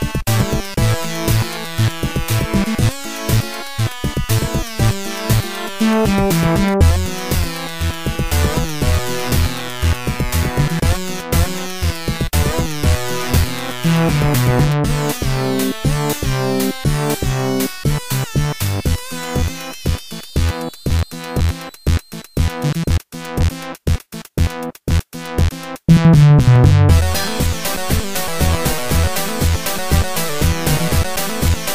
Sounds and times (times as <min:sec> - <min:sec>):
Music: 0:00.0 - 0:31.7.